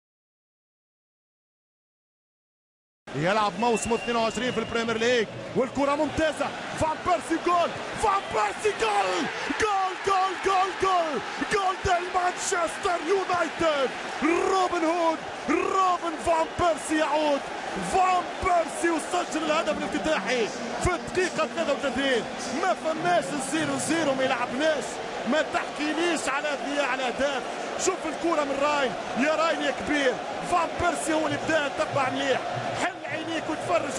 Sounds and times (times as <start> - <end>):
Speech: 3.1 - 33.9.